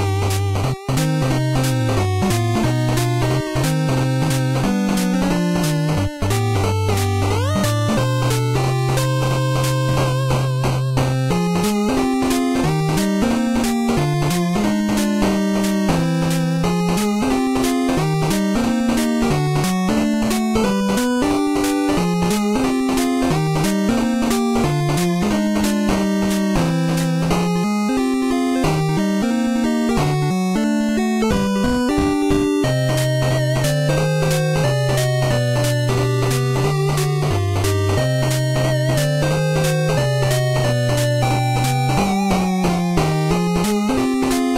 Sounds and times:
Video game music: 0.0 - 44.5.

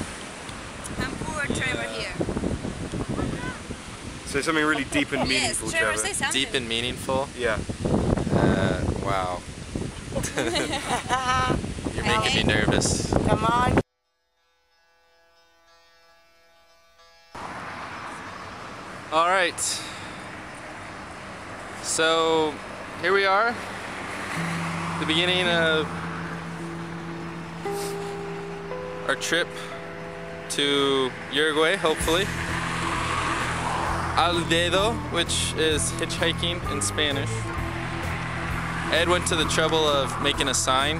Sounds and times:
Outside, urban or manmade: 0.0 - 15.6, 16.6 - 40.9
Speech: 1.0 - 2.2, 4.3 - 7.6, 10.5 - 13.8, 25.0 - 25.9, 34.2 - 37.4, 39.0 - 40.9
Music: 14.0 - 17.4, 24.4 - 40.9.

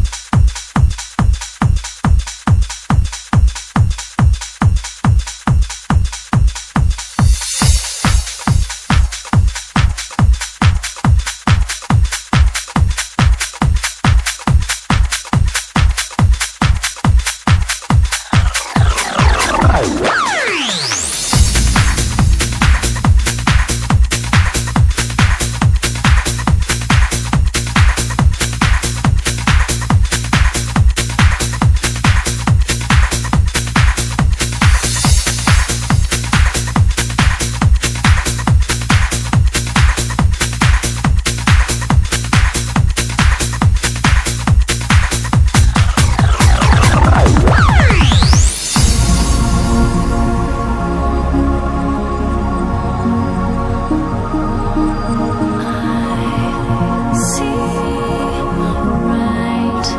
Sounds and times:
Techno: 0.0 - 59.9
Trance music: 15.4 - 59.9.

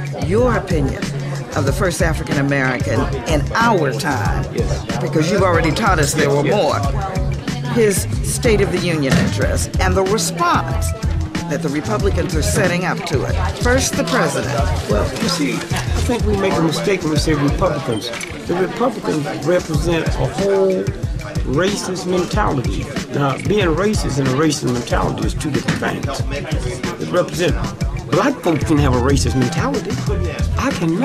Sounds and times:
Conversation: 0.0 - 31.0
Music: 0.0 - 31.0
Female speech, woman speaking: 0.1 - 16.7.

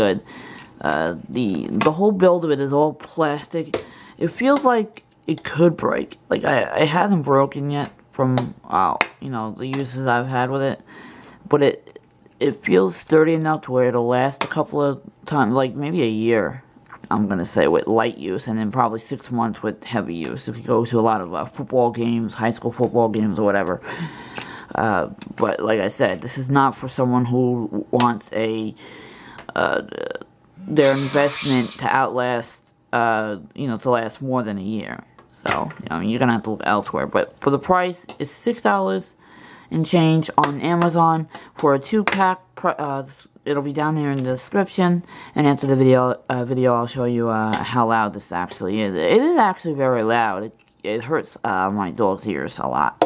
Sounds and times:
Speech: 0.0 - 10.8, 11.5 - 23.8, 24.7 - 28.8, 29.5 - 53.0.

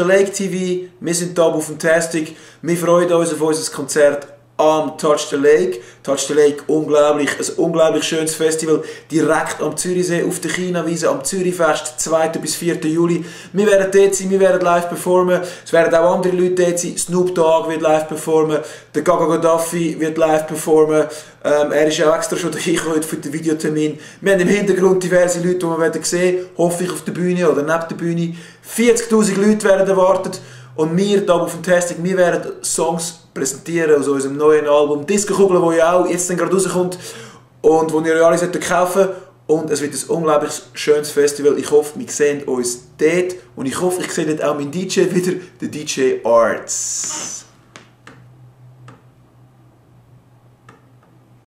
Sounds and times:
Speech: 0.0 - 37.0, 37.6 - 47.5.

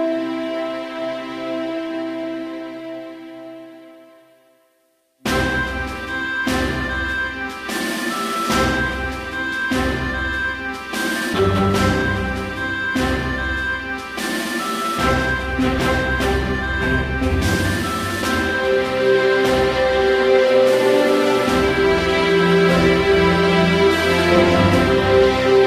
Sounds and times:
Rhythm and blues: 5.3 - 25.6.

